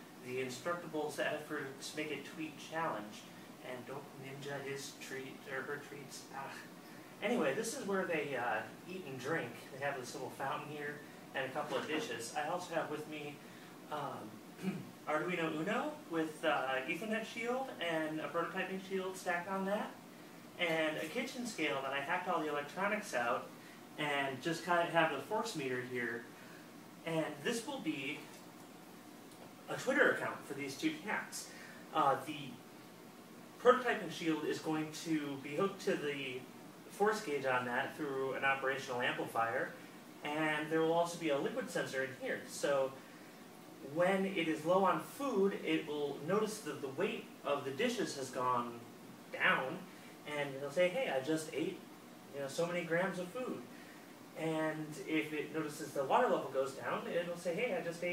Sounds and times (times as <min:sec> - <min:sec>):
Speech: 0:00.2 - 0:20.0, 0:20.6 - 0:26.3, 0:27.0 - 0:28.4, 0:29.7 - 0:32.6, 0:33.6 - 0:43.0, 0:43.8 - 0:53.7, 0:54.4 - 0:58.1.